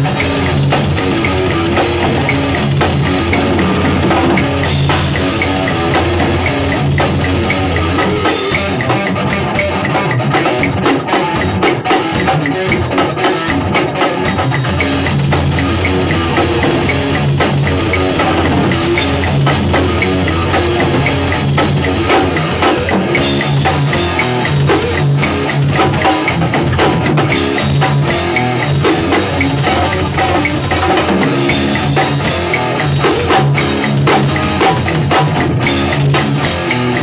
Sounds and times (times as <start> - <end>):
Drum: 0.0 - 37.0
Drum kit: 0.0 - 37.0
Heavy metal: 0.0 - 37.0.